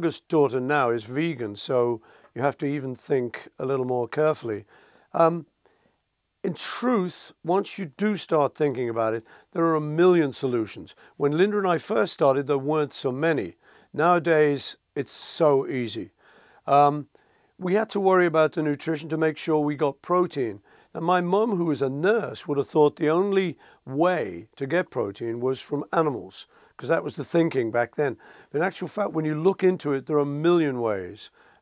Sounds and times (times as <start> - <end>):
Speech: 0.0 - 5.5, 6.4 - 16.1, 16.7 - 31.3.